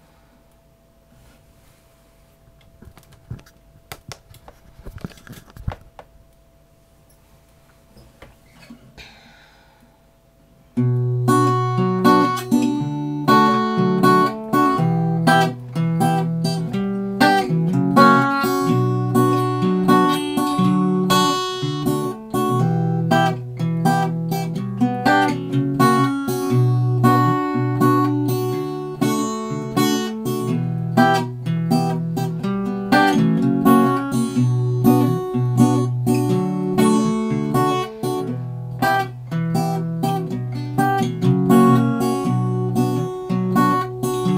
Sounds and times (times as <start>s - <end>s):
Acoustic guitar: 10.7s - 44.3s
Strum: 10.8s - 44.3s.